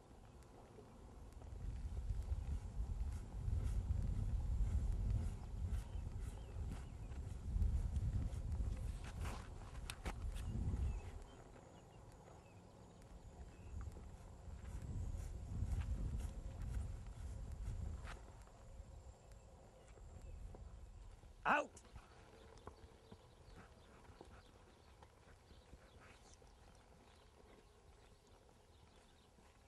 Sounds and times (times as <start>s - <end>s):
Speech: 21.4s - 21.8s.